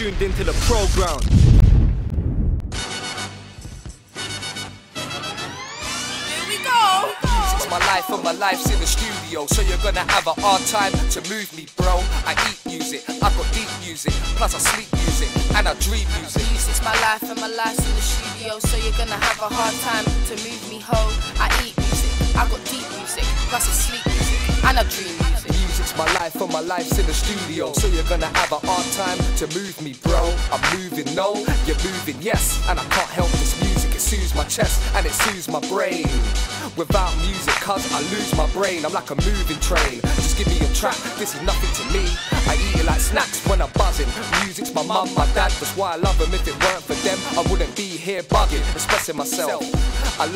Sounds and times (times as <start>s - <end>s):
Soundtrack music: 2.7s - 11.2s, 30.1s - 50.3s.